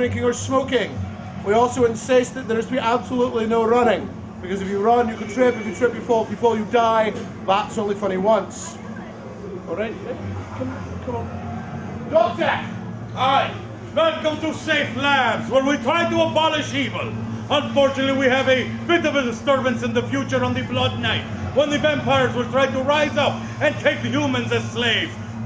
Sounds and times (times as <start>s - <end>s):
Speech: 0.0s - 8.8s, 12.1s - 25.2s.